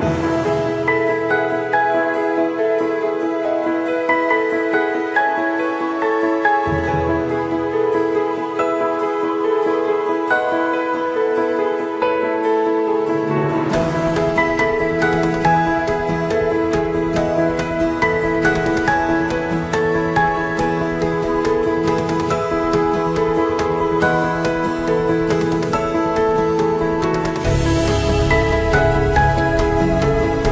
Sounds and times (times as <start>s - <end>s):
Music: 0.0s - 30.5s.